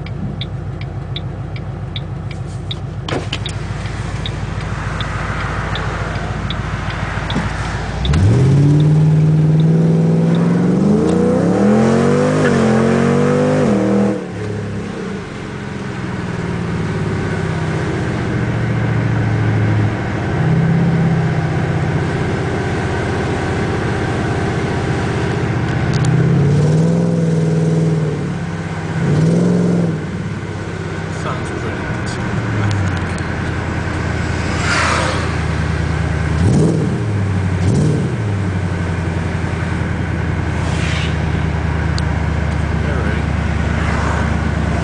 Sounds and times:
Car: 0.0 - 44.8
Speech: 31.1 - 32.2, 42.7 - 43.3.

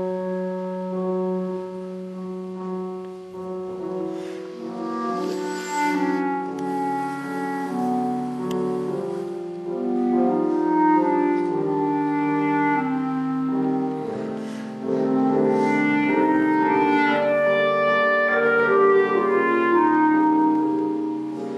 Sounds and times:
Clarinet: 0.0 - 21.5
Classical music: 0.0 - 21.5
Piano: 0.0 - 21.5.

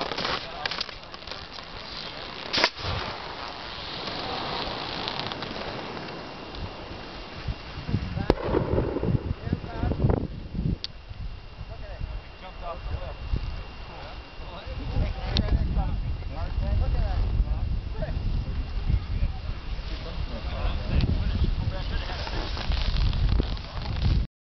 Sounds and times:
Speech: 9.4 - 10.1, 11.7 - 13.2, 13.9 - 22.5.

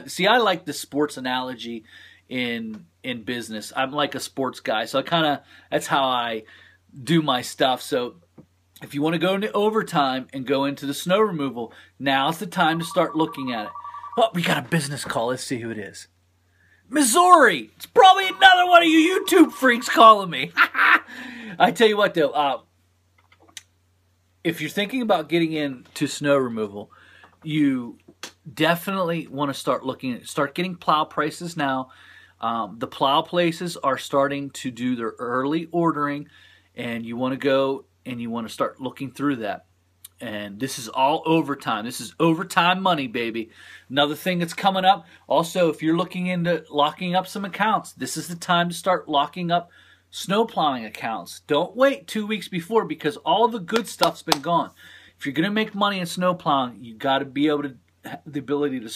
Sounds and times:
Speech: 0.0 - 8.2, 8.8 - 16.1, 16.9 - 20.6, 21.6 - 22.7, 24.4 - 58.9.

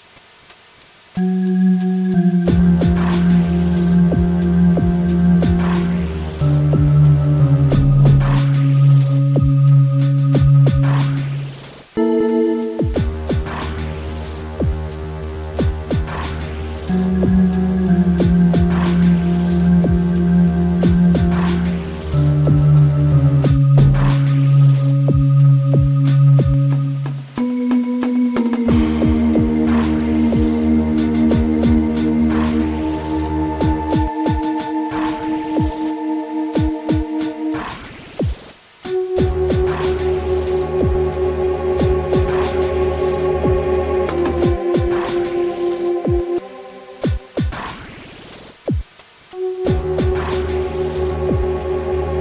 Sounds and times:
Music: 1.2 - 52.2.

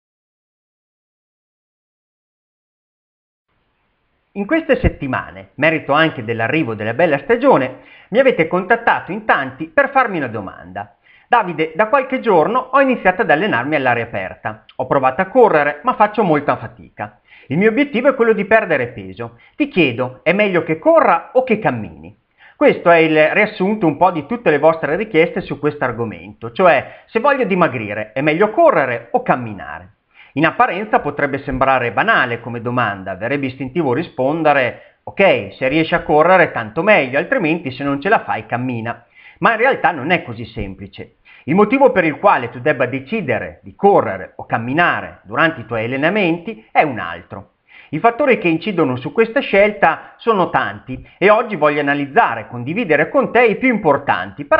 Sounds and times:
Inside, small room: 3.5 - 54.5
Male speech, man speaking: 4.4 - 54.5.

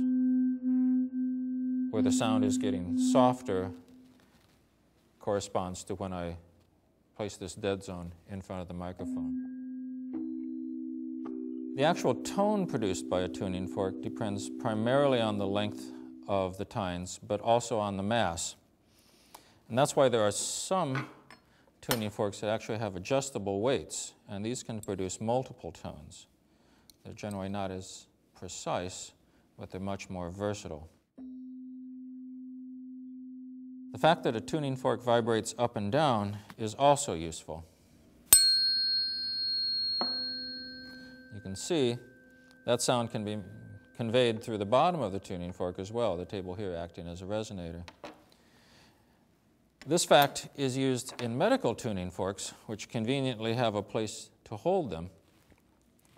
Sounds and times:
Tuning fork: 0.0 - 4.2, 9.0 - 17.0, 31.2 - 34.8, 38.3 - 46.5.

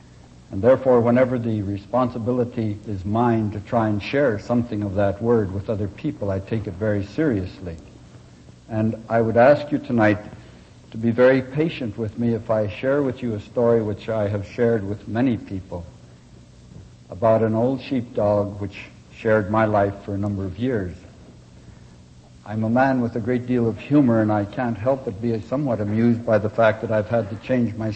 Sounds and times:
Speech: 0.5 - 7.9, 8.7 - 16.0, 17.1 - 21.2, 22.4 - 27.9.

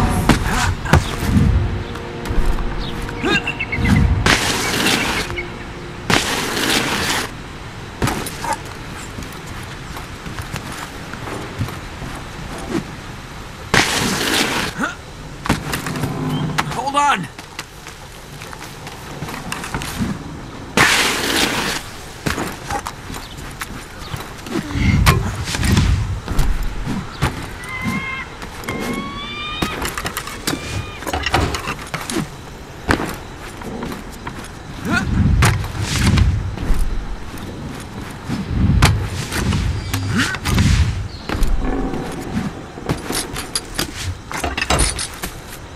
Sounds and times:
Outside, rural or natural: 0.0 - 45.7
Speech: 16.7 - 17.3.

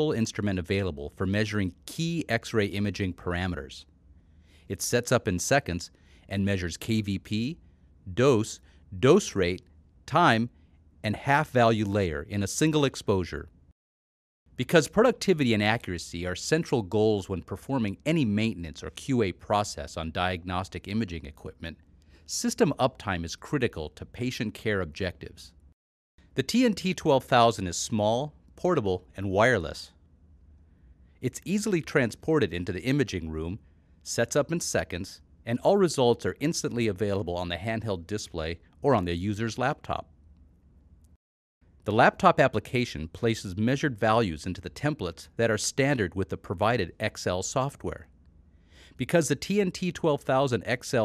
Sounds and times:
Speech: 0.0 - 3.9, 4.7 - 13.5, 14.6 - 25.6, 26.4 - 30.0, 31.2 - 40.1, 41.9 - 48.1, 49.0 - 51.0.

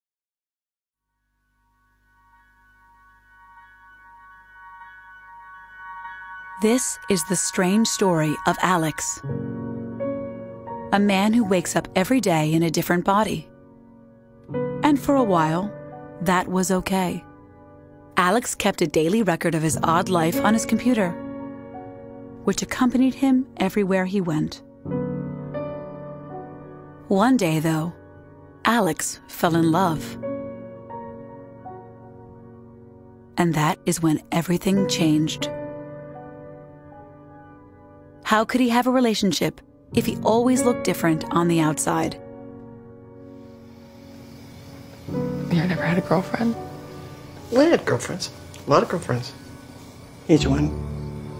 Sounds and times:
Music: 1.0 - 51.3
Speech: 6.6 - 9.2, 22.5 - 24.6, 27.1 - 28.0, 28.7 - 30.2, 33.4 - 35.5, 38.3 - 42.2, 47.5 - 49.4, 50.3 - 50.7.

